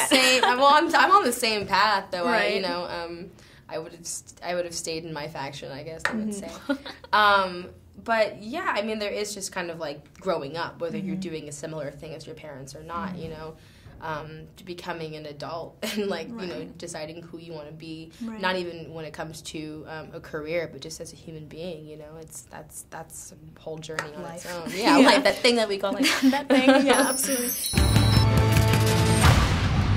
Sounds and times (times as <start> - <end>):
Speech: 0.0 - 4.9, 7.2 - 12.0, 12.6 - 27.3.